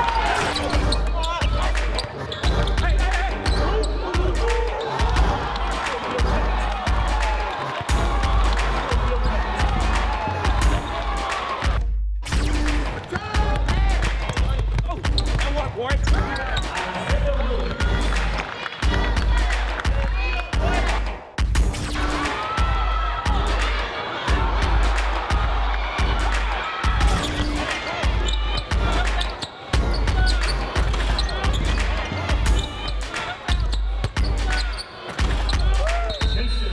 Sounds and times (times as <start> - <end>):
Music: 0.0 - 36.7
Speech: 14.4 - 17.8.